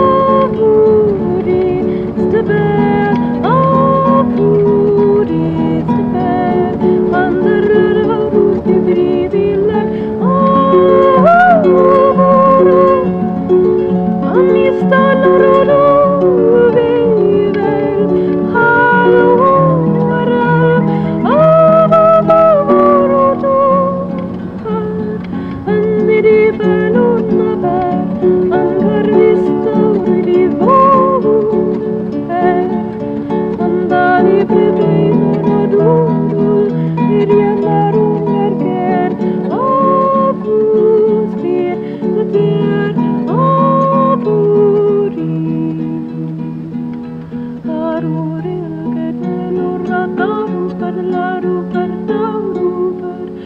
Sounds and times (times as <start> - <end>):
Harp: 0.0 - 53.4.